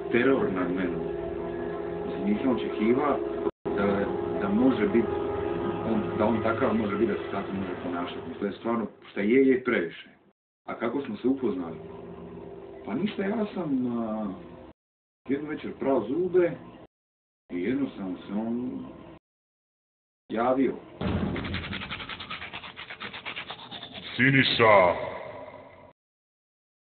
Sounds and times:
Speech: 0:00.1 - 0:01.0, 0:02.2 - 0:05.1, 0:05.8 - 0:11.8, 0:12.9 - 0:14.4, 0:15.3 - 0:16.6, 0:17.5 - 0:18.9, 0:20.3 - 0:20.8, 0:24.1 - 0:25.4.

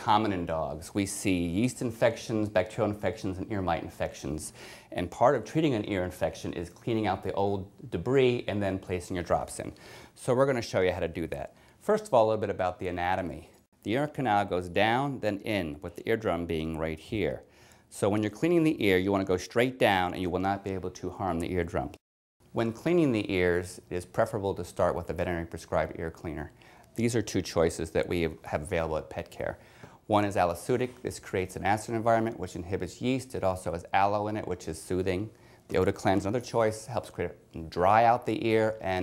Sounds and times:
Speech: 0:00.0 - 0:39.0.

